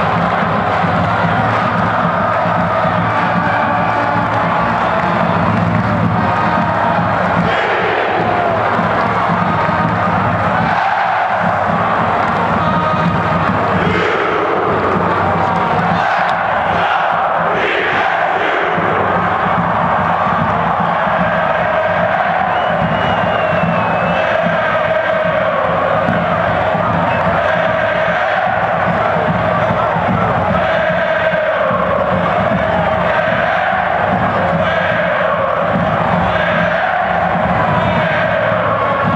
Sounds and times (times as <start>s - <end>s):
Music: 0.0s - 39.1s
Speech: 12.3s - 14.0s.